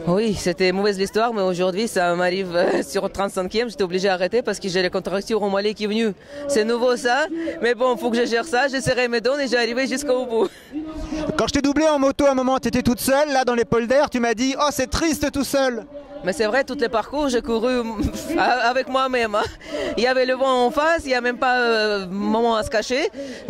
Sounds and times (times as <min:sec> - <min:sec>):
Speech: 0:00.0 - 0:23.5.